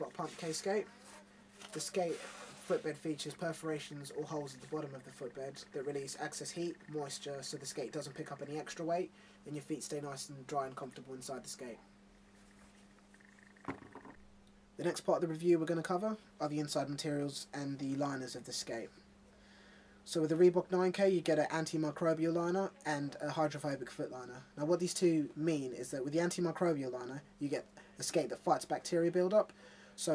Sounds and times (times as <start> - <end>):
Speech: 0.0 - 11.9, 14.8 - 19.0, 20.1 - 30.1.